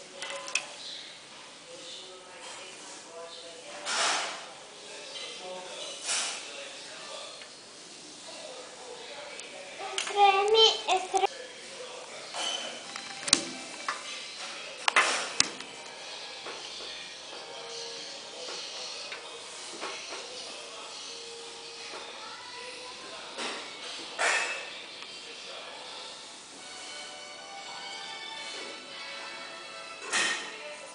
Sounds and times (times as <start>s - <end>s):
Speech: 8.1s - 12.9s.